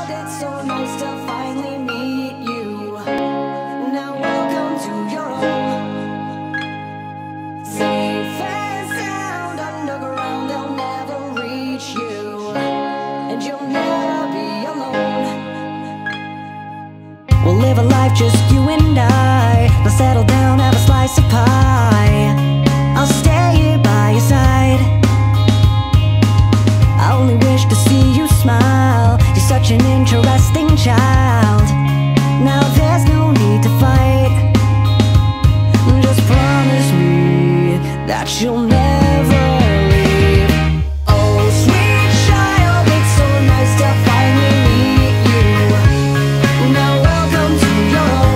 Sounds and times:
Music: 0:00.0 - 0:48.3.

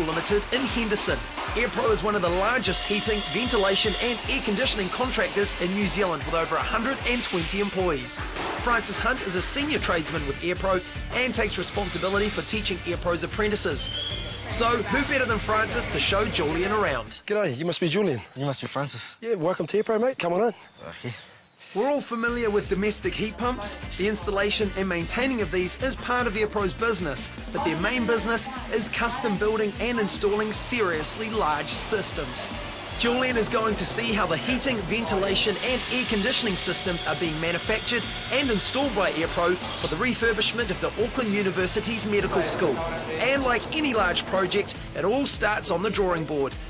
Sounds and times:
Music: 0:00.0 - 0:17.3, 0:21.8 - 0:46.7
Speech: 0:00.0 - 0:21.2, 0:21.8 - 0:46.6.

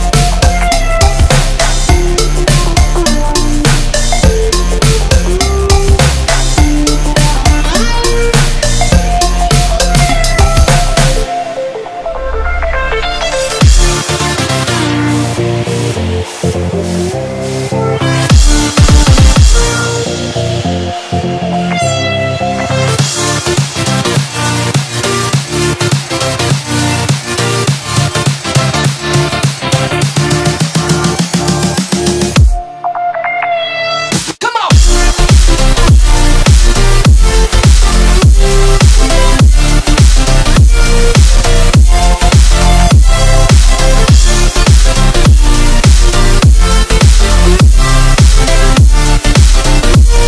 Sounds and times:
Music: 0:00.0 - 0:50.2.

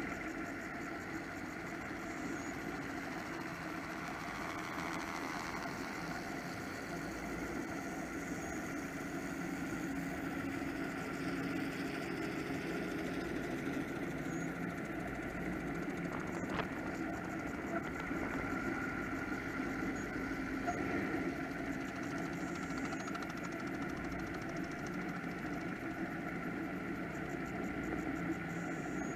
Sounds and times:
Motorboat, speedboat: 0:00.0 - 0:29.1.

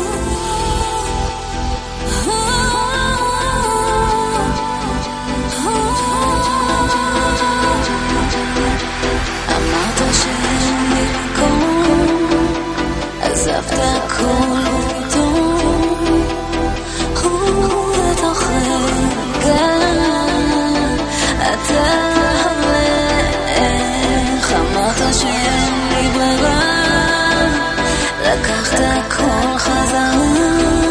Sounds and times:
Electronic music: 0:00.0 - 0:30.9.

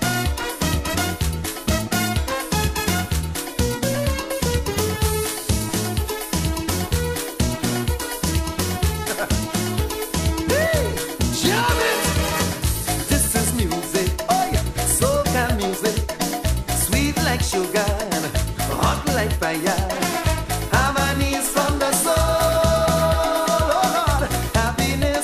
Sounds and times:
Dance music: 0:00.0 - 0:25.2.

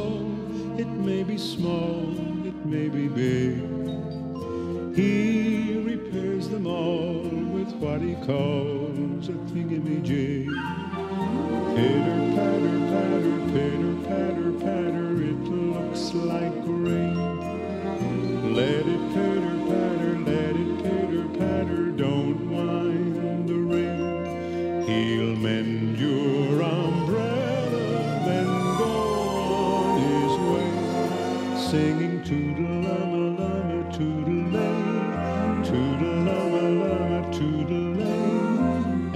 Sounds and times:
Soul music: 0:00.0 - 0:39.1.

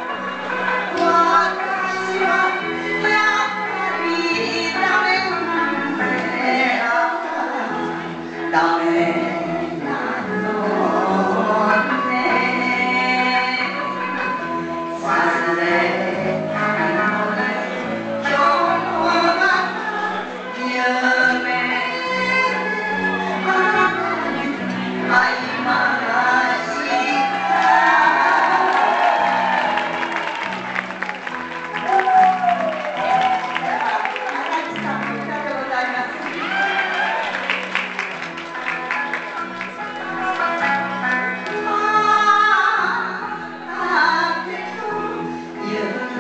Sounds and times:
Female singing: 0:00.0 - 0:29.4, 0:40.2 - 0:46.2
Music: 0:00.0 - 0:46.2.

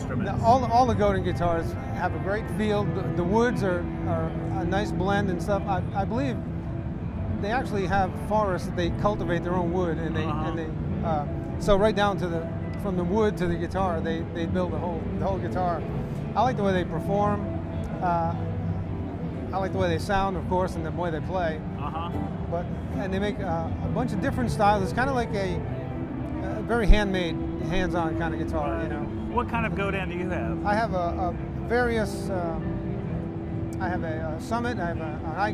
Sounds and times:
Speech: 0:00.0 - 0:06.4, 0:07.4 - 0:15.8, 0:16.4 - 0:17.4, 0:18.0 - 0:18.4, 0:19.6 - 0:25.6, 0:26.4 - 0:32.6, 0:33.8 - 0:35.5.

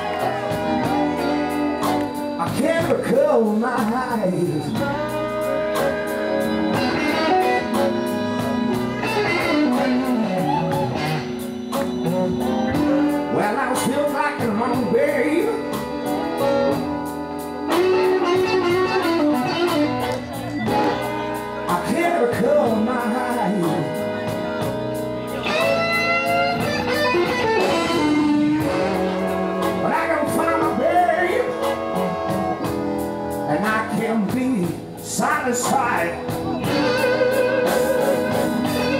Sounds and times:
Music: 0:00.0 - 0:38.9.

